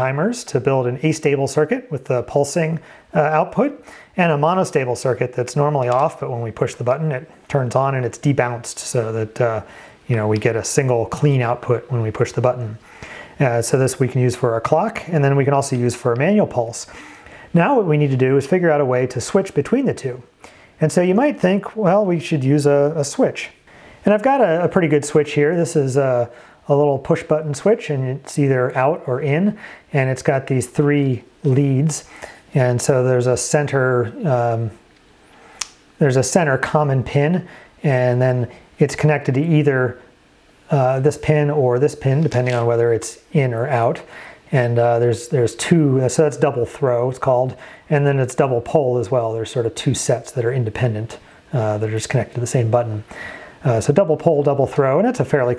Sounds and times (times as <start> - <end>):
Speech: 0.0 - 12.8, 13.4 - 34.8, 36.0 - 40.1, 40.7 - 55.5.